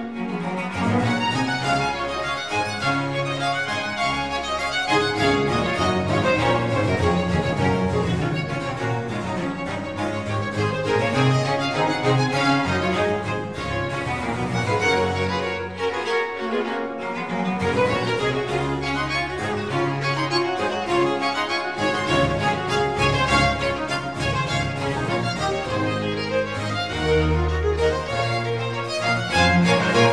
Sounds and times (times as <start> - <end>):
Music: 0.0 - 30.1.